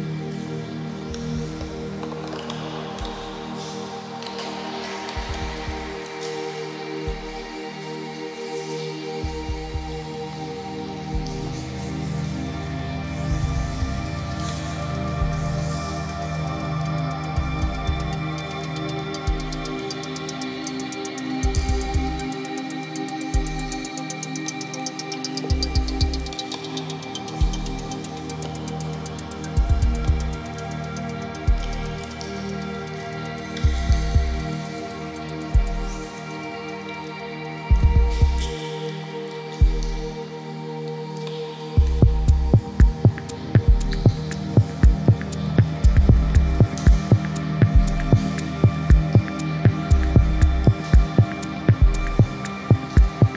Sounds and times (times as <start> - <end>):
Music: 0.0 - 53.3.